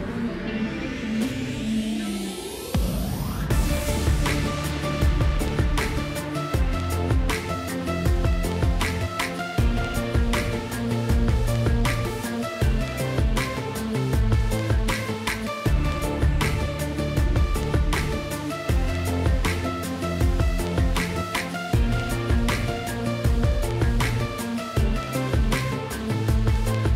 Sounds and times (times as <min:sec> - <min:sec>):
Music: 0:00.0 - 0:26.9.